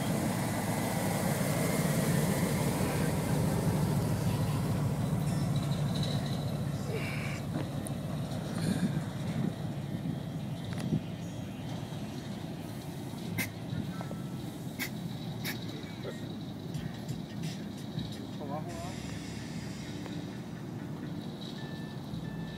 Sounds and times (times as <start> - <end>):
Music: 16.7 - 22.5
Speech: 18.4 - 19.0.